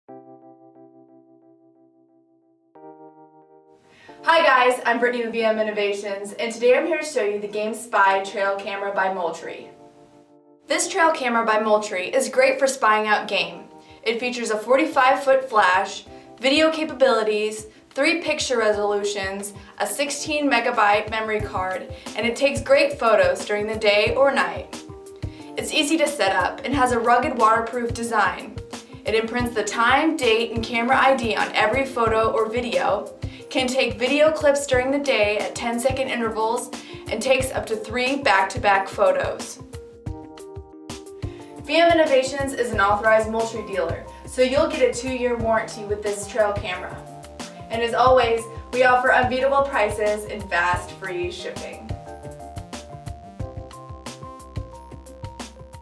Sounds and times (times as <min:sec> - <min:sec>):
Music: 0:00.1 - 0:55.8
Speech: 0:04.3 - 0:09.7, 0:10.7 - 0:24.7, 0:25.6 - 0:28.5, 0:29.1 - 0:39.6, 0:41.7 - 0:47.0, 0:47.7 - 0:51.9.